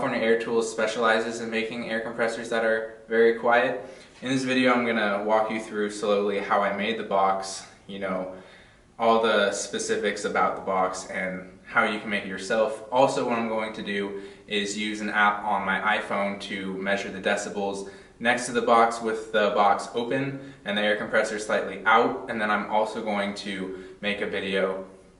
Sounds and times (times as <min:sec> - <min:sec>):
Speech: 0:00.0 - 0:08.4, 0:09.0 - 0:24.9.